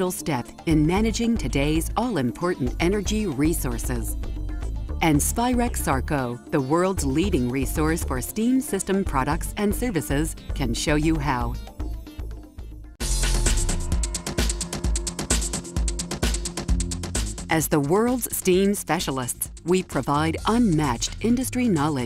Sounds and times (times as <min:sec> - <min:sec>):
Speech: 0:00.0 - 0:04.2, 0:05.0 - 0:11.6, 0:17.5 - 0:22.0
Music: 0:00.0 - 0:22.0.